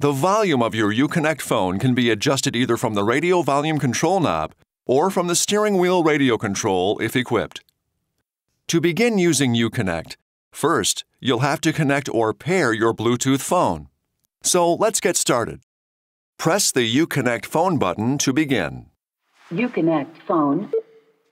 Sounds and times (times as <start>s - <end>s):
Speech: 0.0s - 7.7s, 8.7s - 15.6s, 16.4s - 20.8s.